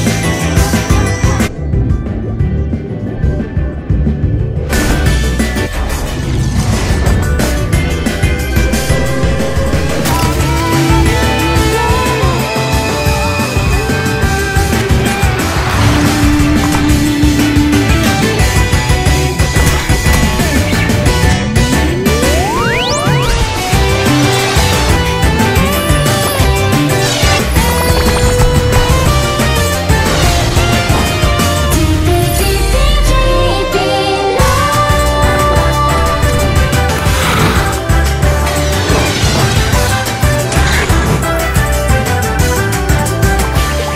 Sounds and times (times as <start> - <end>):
Music: 0.0 - 43.9.